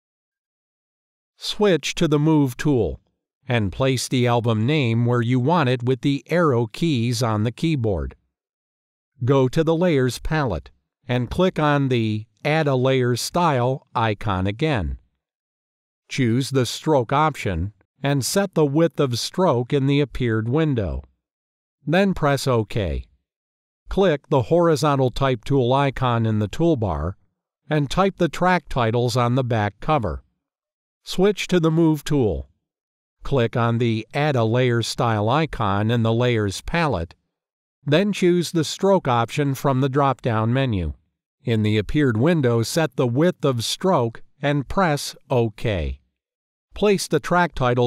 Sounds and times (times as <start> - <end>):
Speech synthesizer: 1.4 - 8.2, 9.2 - 15.0, 16.1 - 21.1, 21.9 - 23.1, 23.9 - 30.2, 31.1 - 32.4, 33.3 - 37.2, 37.9 - 46.0, 46.8 - 47.8.